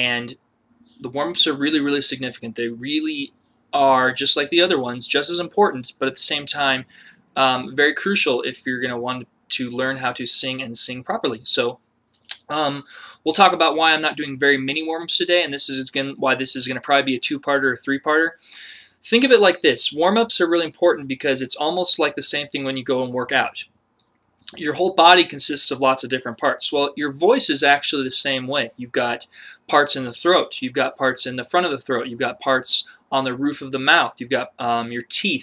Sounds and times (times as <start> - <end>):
Speech: 0.0 - 0.4, 1.0 - 18.4, 19.0 - 23.7, 24.5 - 35.4.